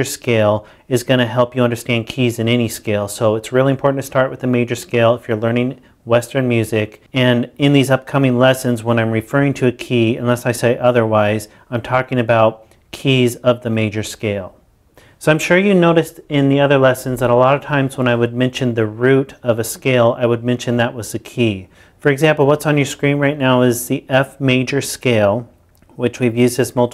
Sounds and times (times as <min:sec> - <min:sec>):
Speech: 0:00.0 - 0:14.6, 0:15.2 - 0:26.9.